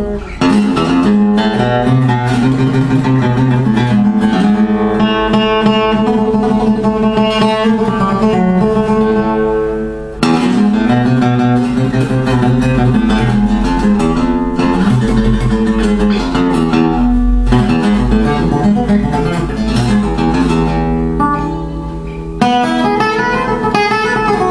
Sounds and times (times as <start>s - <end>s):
Acoustic guitar: 0.0s - 24.5s
Strum: 0.0s - 24.5s.